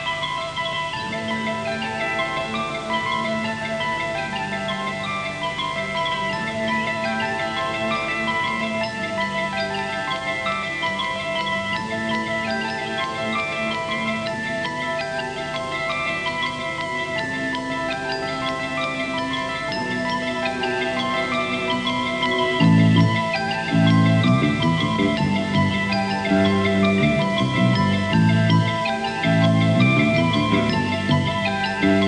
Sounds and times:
Music: 0.0 - 32.0.

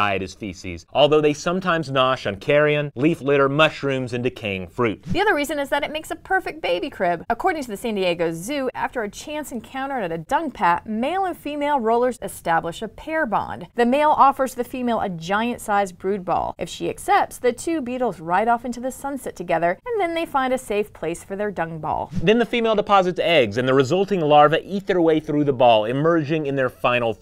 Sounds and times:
Speech: 0.0 - 27.2.

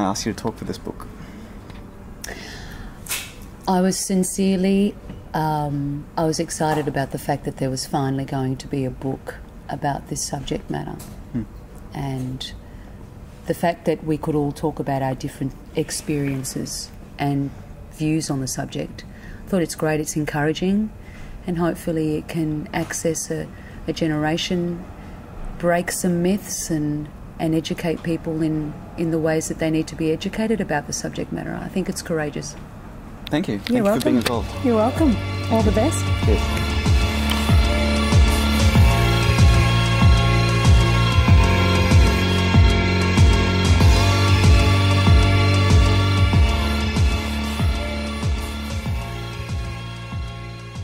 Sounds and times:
Speech: 33.3 - 36.4
Music: 33.8 - 50.8.

